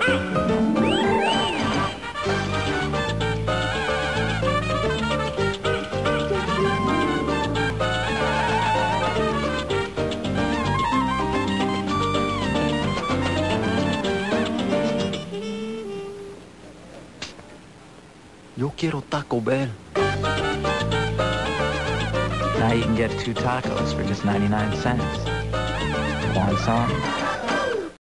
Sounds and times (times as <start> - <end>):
Music: 0.0 - 16.5, 19.9 - 27.7
Speech: 18.6 - 19.8, 22.6 - 25.3, 26.3 - 27.1.